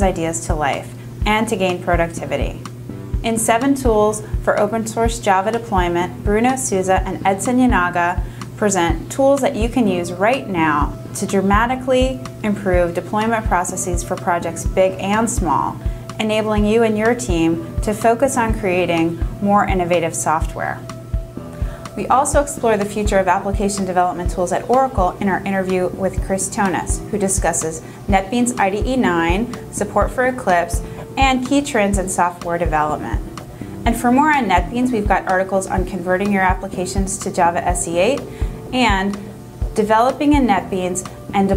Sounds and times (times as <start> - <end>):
Speech: 0.0 - 2.7, 3.3 - 20.8, 22.0 - 33.2, 33.9 - 39.2, 39.8 - 41.5
Music: 0.0 - 41.5.